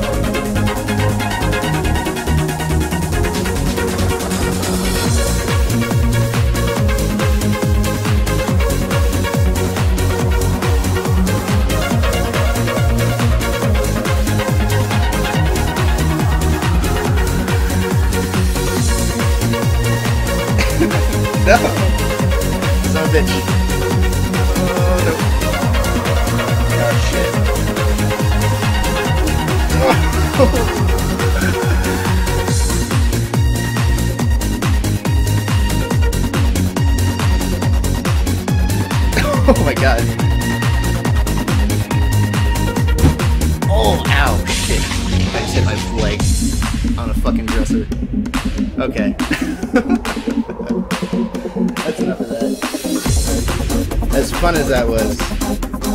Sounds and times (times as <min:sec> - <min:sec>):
Trance music: 0:00.0 - 0:55.9.